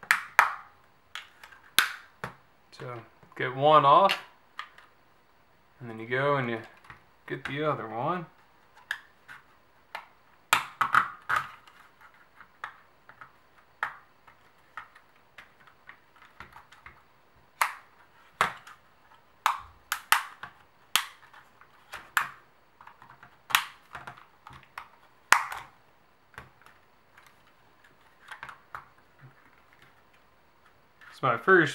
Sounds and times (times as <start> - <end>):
Inside, small room: 0.0 - 31.7
Speech: 2.7 - 4.3, 5.8 - 6.7, 7.3 - 8.3, 31.1 - 31.7.